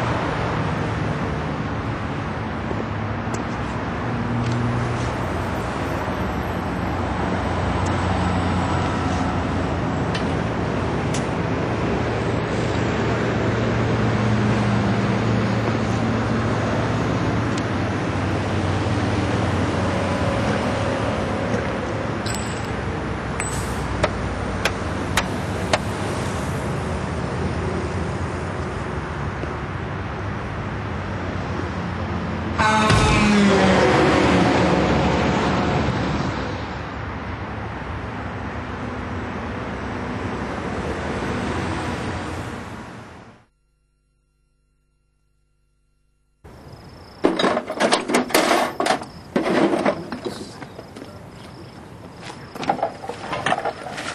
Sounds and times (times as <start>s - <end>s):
Car: 0.0s - 43.5s.